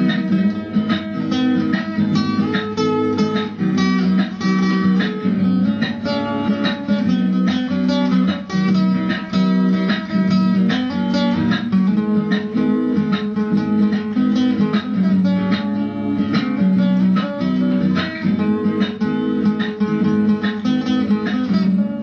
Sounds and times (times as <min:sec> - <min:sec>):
Acoustic guitar: 0:00.0 - 0:22.0
Strum: 0:00.0 - 0:22.0.